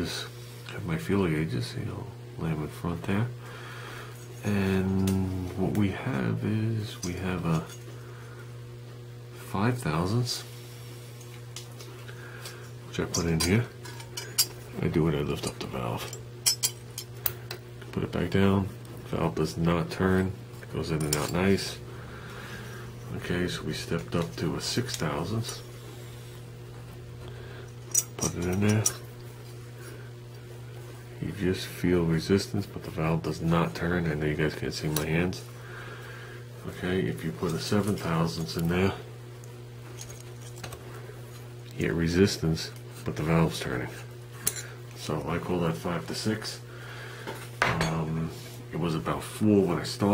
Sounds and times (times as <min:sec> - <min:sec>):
Speech: 0:00.0 - 0:03.4, 0:04.4 - 0:07.8, 0:09.4 - 0:10.5, 0:12.9 - 0:13.8, 0:14.8 - 0:16.2, 0:17.9 - 0:21.8, 0:23.1 - 0:25.7, 0:28.2 - 0:29.0, 0:31.2 - 0:35.5, 0:36.6 - 0:39.1, 0:41.7 - 0:44.1, 0:45.0 - 0:46.6, 0:47.7 - 0:50.1.